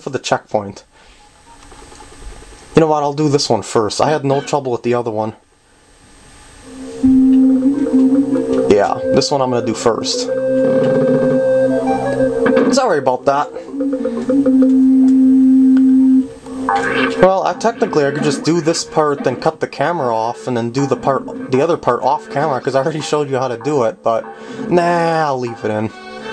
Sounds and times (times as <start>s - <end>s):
Speech: 0.0s - 0.9s, 2.8s - 5.4s, 8.7s - 10.4s, 12.7s - 13.6s, 17.2s - 25.9s
Music: 6.7s - 17.2s, 24.3s - 26.3s.